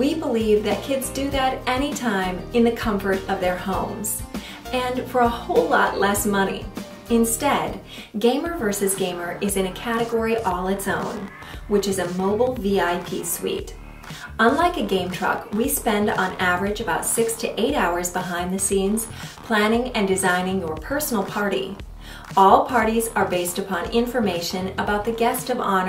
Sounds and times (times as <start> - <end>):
Music: 0.0 - 25.8
Speech: 0.0 - 25.8.